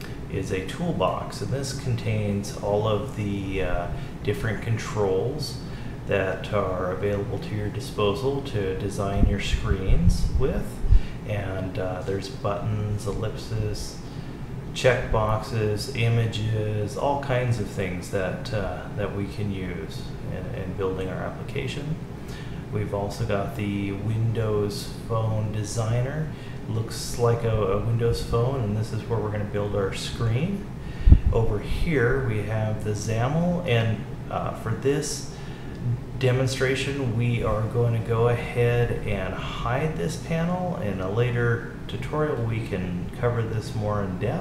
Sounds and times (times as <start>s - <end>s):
Speech: 0.0s - 14.1s, 14.7s - 22.1s, 22.7s - 44.4s.